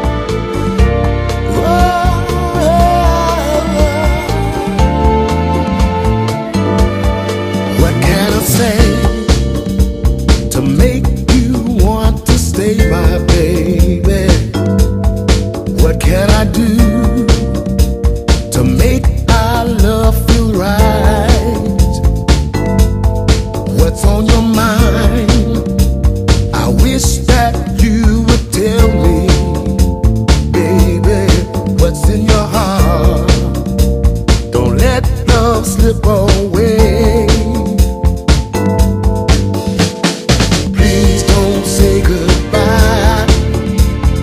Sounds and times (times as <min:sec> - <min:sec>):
Music: 0:00.0 - 0:44.2.